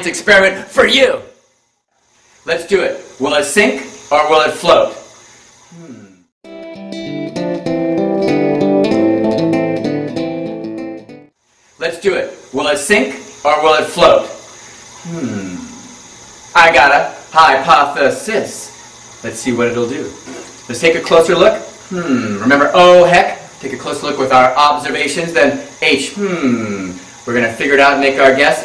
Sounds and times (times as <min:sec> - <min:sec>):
Speech: 0:00.0 - 0:01.4, 0:02.5 - 0:05.1, 0:11.8 - 0:14.4, 0:16.6 - 0:28.6.